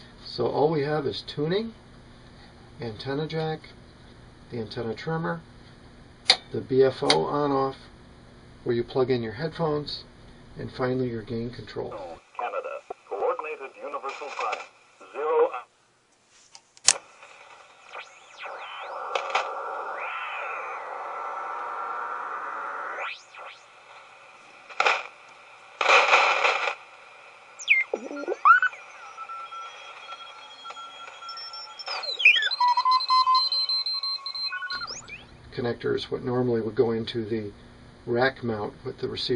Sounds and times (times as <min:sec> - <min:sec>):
Speech: 0:00.2 - 0:01.8, 0:02.8 - 0:03.8, 0:04.5 - 0:05.4, 0:06.5 - 0:07.9, 0:08.6 - 0:15.6, 0:35.5 - 0:39.3
Radio: 0:10.8 - 0:15.7, 0:16.9 - 0:37.4.